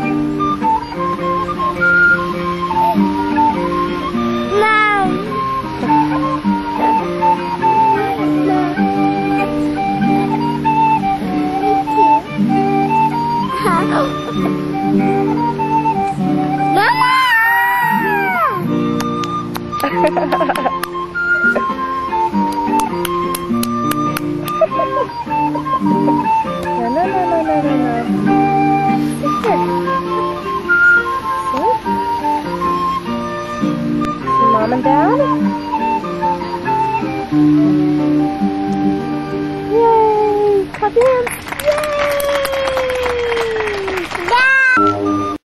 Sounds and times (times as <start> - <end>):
Musical instrument: 0.0 - 41.5
Outside, rural or natural: 0.0 - 45.4.